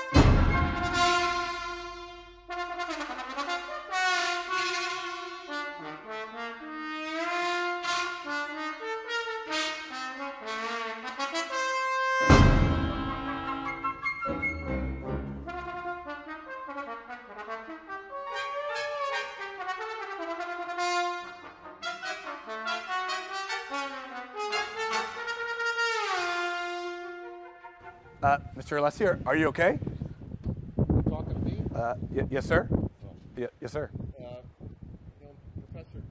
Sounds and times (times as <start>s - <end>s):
Clarinet: 0.0s - 28.7s
Trombone: 0.0s - 29.2s
Trumpet: 0.0s - 29.5s.